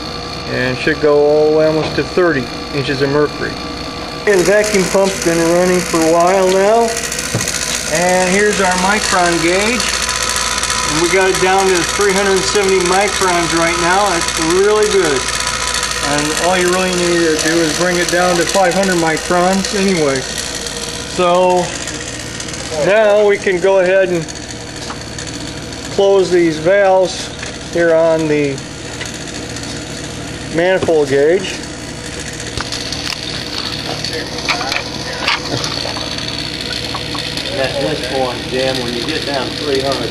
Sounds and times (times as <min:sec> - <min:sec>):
Speech: 0:00.5 - 0:03.6, 0:04.3 - 0:07.0, 0:16.0 - 0:20.2, 0:22.7 - 0:24.3, 0:26.0 - 0:28.6, 0:30.5 - 0:31.6, 0:37.5 - 0:40.1.